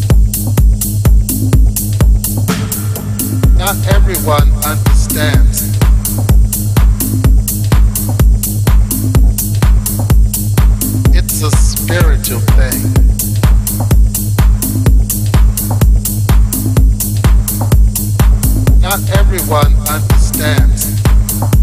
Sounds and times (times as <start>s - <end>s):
House music: 0.0s - 21.6s.